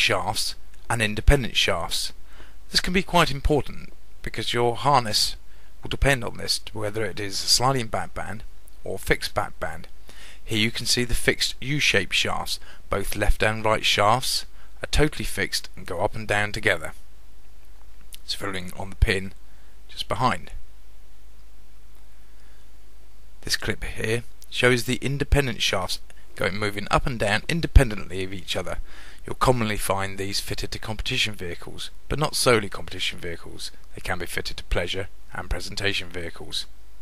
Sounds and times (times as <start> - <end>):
Speech: 0.0 - 17.0, 18.2 - 20.6, 23.4 - 36.7.